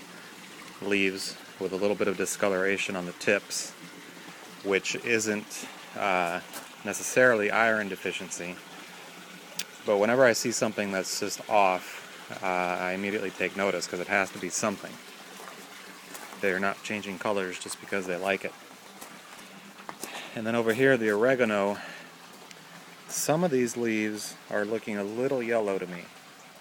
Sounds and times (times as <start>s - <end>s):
Speech: 0.8s - 3.8s, 4.6s - 8.6s, 9.8s - 15.0s, 16.4s - 18.6s, 20.4s - 21.9s, 23.1s - 26.1s.